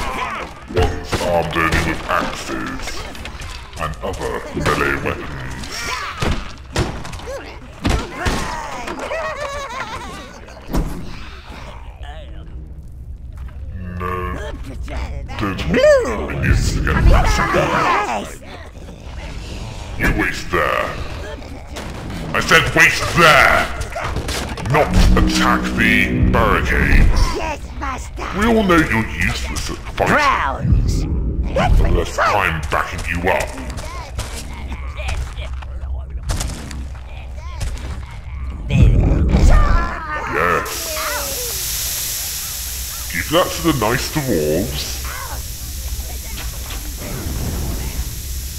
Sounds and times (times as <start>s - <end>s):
Speech: 14.0s - 19.4s, 24.7s - 36.3s, 43.1s - 45.1s.